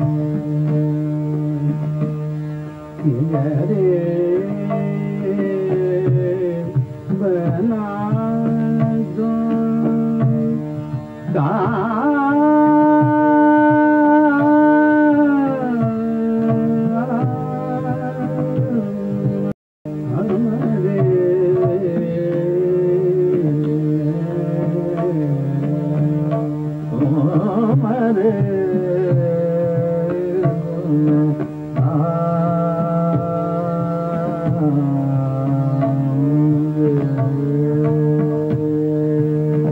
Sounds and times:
Carnatic music: 0.0 - 39.7.

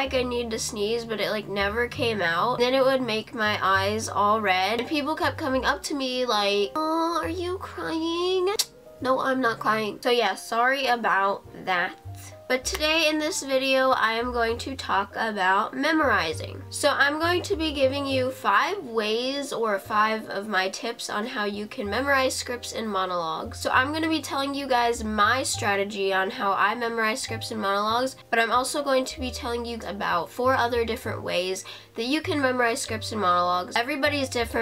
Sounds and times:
Music: 0.0 - 34.6
Speech: 0.0 - 34.6.

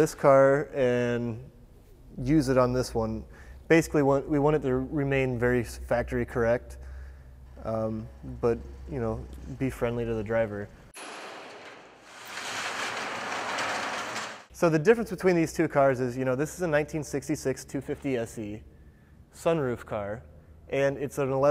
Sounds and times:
Speech: 0.0 - 1.5, 2.2 - 6.8, 7.6 - 10.7, 14.6 - 18.6, 19.4 - 21.5.

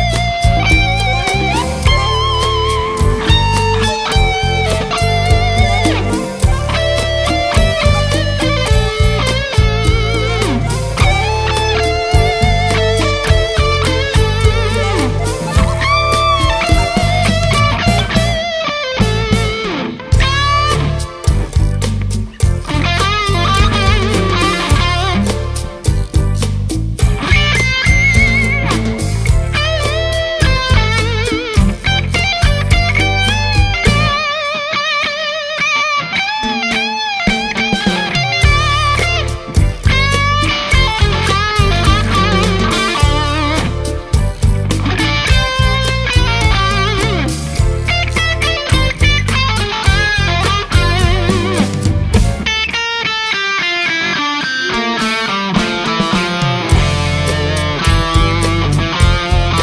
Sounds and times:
Guitar: 0.0 - 59.6.

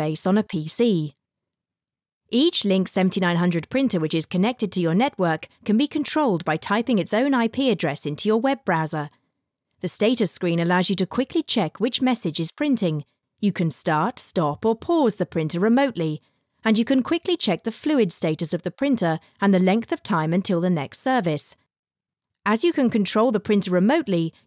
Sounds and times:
Speech: 0.0 - 1.2, 2.4 - 9.1, 9.8 - 21.6, 22.5 - 24.4.

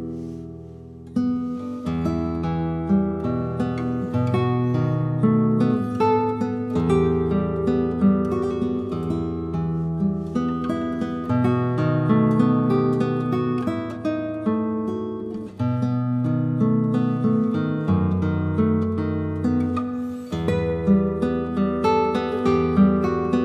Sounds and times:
Guitar: 0.0 - 23.4.

